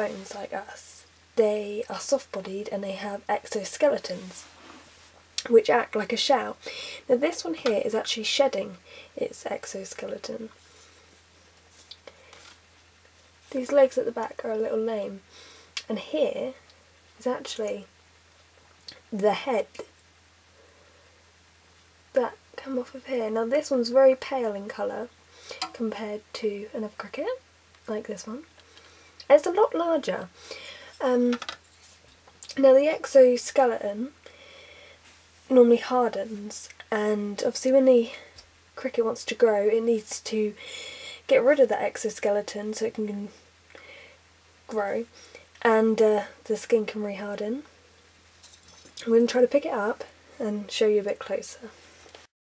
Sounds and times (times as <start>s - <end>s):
Speech: 0.0s - 4.5s, 5.4s - 10.5s, 13.5s - 15.2s, 15.8s - 16.6s, 17.2s - 17.9s, 18.9s - 19.9s, 22.1s - 28.5s, 29.2s - 30.3s, 31.0s - 31.4s, 32.5s - 34.2s, 35.5s - 40.6s, 41.3s - 43.4s, 44.7s - 47.7s, 49.0s - 51.8s.